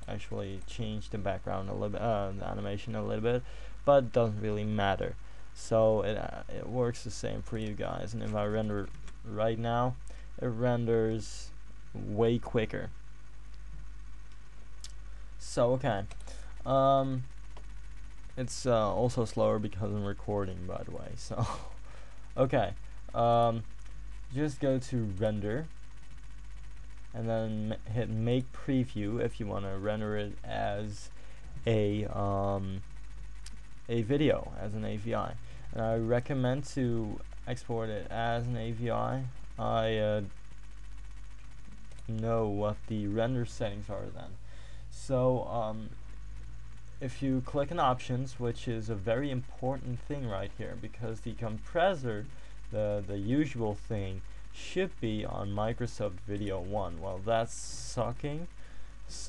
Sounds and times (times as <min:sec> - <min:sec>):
Speech: 0:00.0 - 0:13.0, 0:15.4 - 0:17.3, 0:18.4 - 0:21.8, 0:22.4 - 0:23.7, 0:24.3 - 0:25.7, 0:27.2 - 0:32.8, 0:33.9 - 0:40.3, 0:42.0 - 0:46.0, 0:47.0 - 0:59.2.